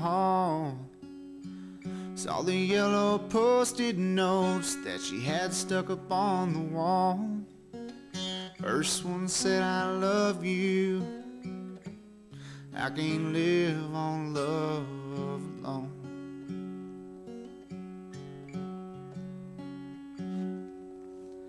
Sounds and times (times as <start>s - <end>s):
Music: 0.0s - 21.4s.